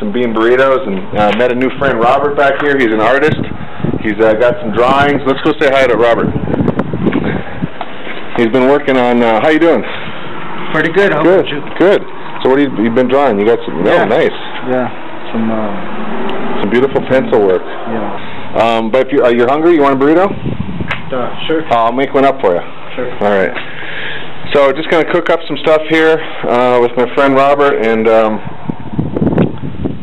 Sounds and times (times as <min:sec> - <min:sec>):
Speech: 0:00.0 - 0:03.4, 0:04.0 - 0:06.3, 0:08.4 - 0:09.9, 0:10.7 - 0:15.9, 0:16.6 - 0:20.4, 0:21.1 - 0:23.6, 0:24.5 - 0:28.4.